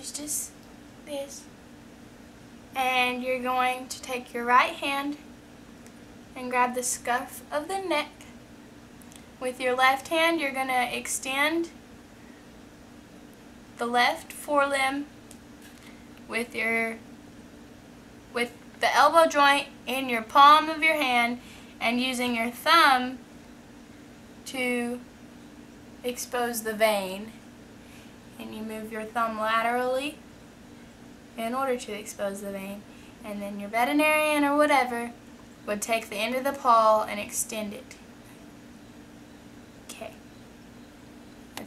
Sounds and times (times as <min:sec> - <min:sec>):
Speech: 0:00.0 - 0:01.5, 0:02.8 - 0:05.2, 0:06.4 - 0:08.3, 0:09.4 - 0:11.8, 0:13.8 - 0:15.1, 0:16.3 - 0:17.0, 0:18.4 - 0:23.2, 0:24.5 - 0:25.0, 0:26.1 - 0:27.4, 0:28.4 - 0:30.2, 0:31.4 - 0:38.0, 0:39.9 - 0:40.2.